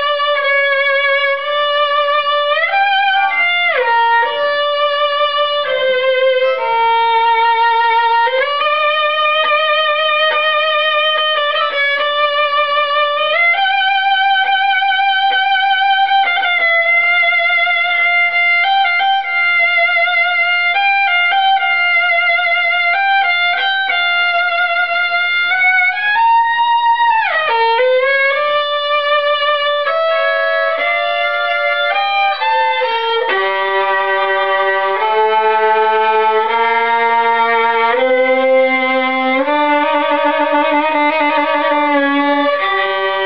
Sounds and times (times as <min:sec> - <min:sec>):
Violin, fiddle: 0:00.0 - 0:43.2.